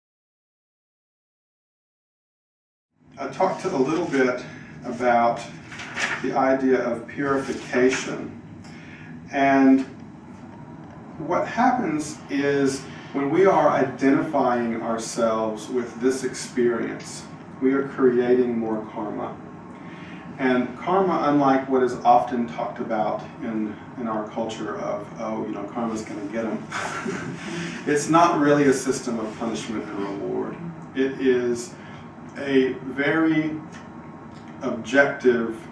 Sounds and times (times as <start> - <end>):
Speech: 3.2 - 8.4, 9.3 - 10.0, 11.2 - 19.4, 20.4 - 26.7, 27.8 - 33.8, 34.6 - 35.7.